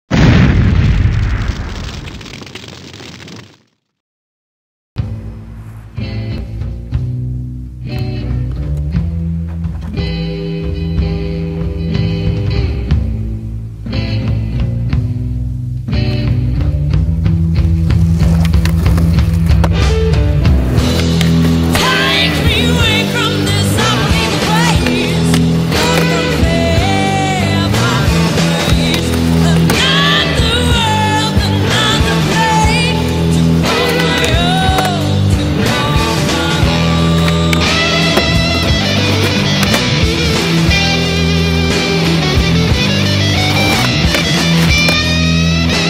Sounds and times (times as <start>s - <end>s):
Grunge: 14.0s - 45.8s
Skateboard: 17.3s - 45.8s.